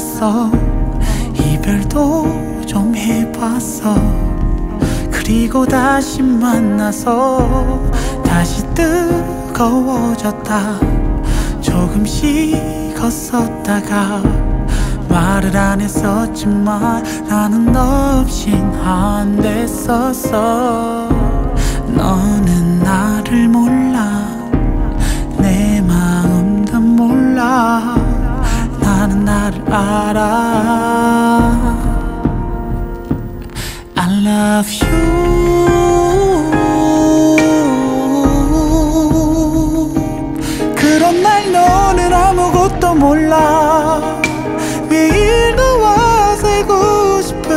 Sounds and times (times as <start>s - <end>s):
Music: 0.0s - 47.5s.